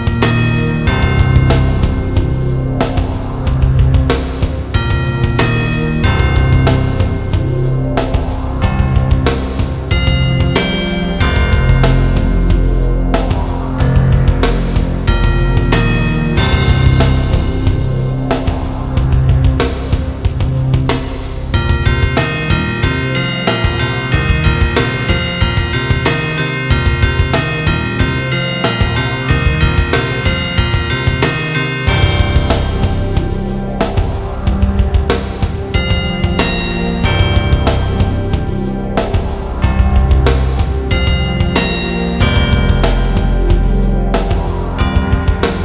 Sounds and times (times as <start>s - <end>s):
Music: 0.0s - 45.6s.